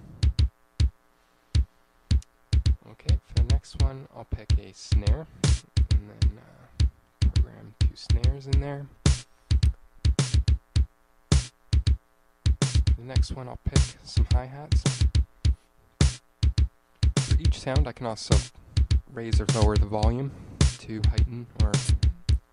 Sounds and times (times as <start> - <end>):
Bass drum: 0.0 - 1.0, 1.6 - 22.5
Drum kit: 0.0 - 1.0, 1.6 - 22.5
Speech: 2.8 - 5.3, 5.9 - 9.0, 12.9 - 14.9, 17.3 - 22.2.